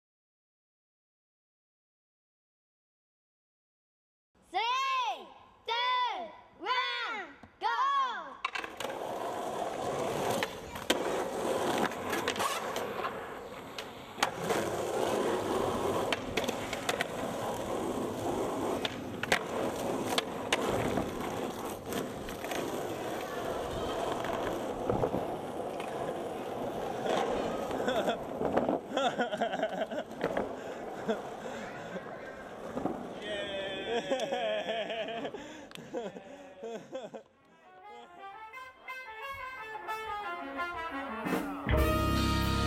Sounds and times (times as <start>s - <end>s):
Skateboard: 8.3s - 36.0s.